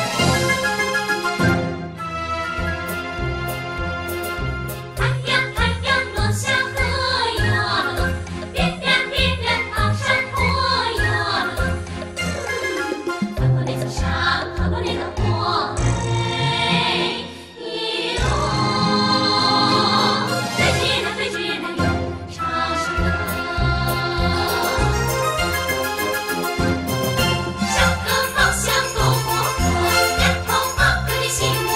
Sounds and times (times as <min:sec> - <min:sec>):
Choir: 0:05.0 - 0:11.8, 0:13.6 - 0:25.3, 0:27.6 - 0:31.7.